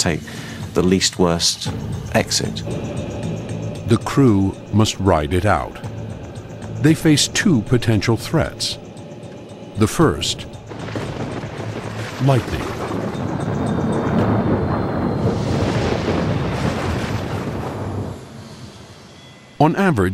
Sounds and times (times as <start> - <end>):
Speech: 0.0 - 2.7, 3.9 - 5.8, 6.8 - 8.8, 9.8 - 10.5, 12.2 - 12.7, 19.6 - 20.1.